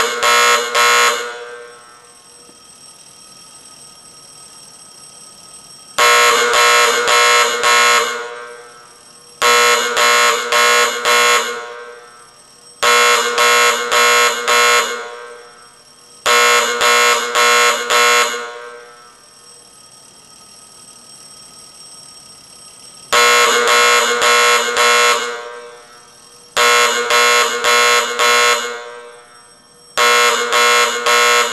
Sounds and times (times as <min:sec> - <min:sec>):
Buzzer: 0:00.0 - 0:01.6, 0:06.0 - 0:08.4, 0:09.4 - 0:12.0, 0:12.8 - 0:15.4, 0:16.3 - 0:18.9, 0:23.2 - 0:25.6, 0:26.6 - 0:29.1, 0:30.0 - 0:31.5
Fire alarm: 0:00.0 - 0:31.5.